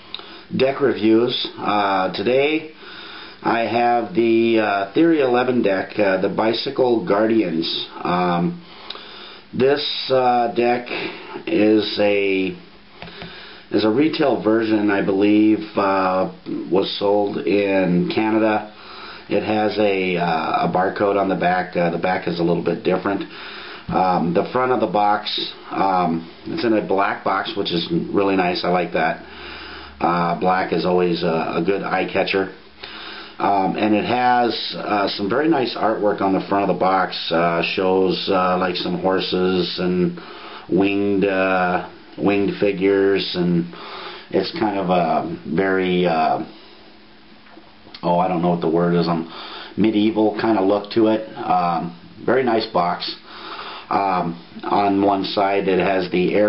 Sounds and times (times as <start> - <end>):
Speech: 0.5 - 2.8, 3.4 - 8.6, 9.5 - 12.7, 13.7 - 23.3, 23.9 - 29.3, 30.0 - 32.6, 33.4 - 46.6, 48.0 - 53.3, 53.9 - 56.4.